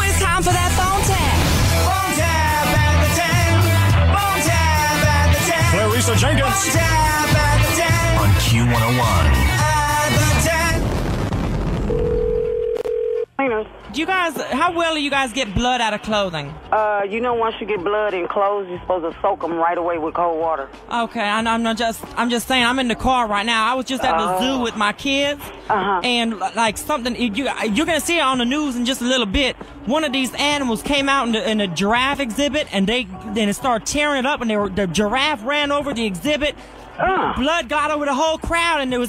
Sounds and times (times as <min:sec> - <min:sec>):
Music: 0:00.0 - 0:11.2, 0:13.8 - 0:39.0.